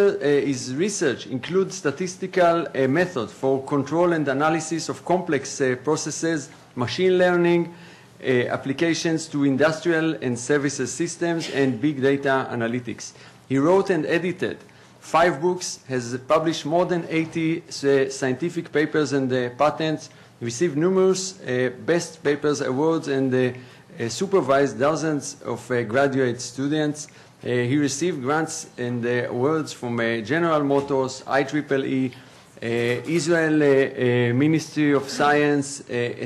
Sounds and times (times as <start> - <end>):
Speech: 0.0 - 36.2.